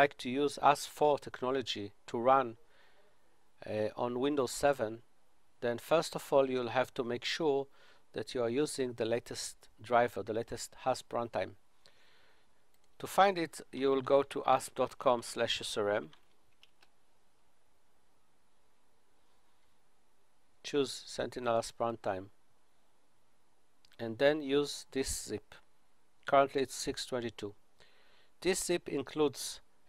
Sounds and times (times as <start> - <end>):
Speech: 0.0 - 2.6, 3.6 - 5.0, 5.6 - 11.6, 13.0 - 16.1, 20.6 - 22.3, 24.0 - 25.6, 26.3 - 27.6, 28.4 - 29.6.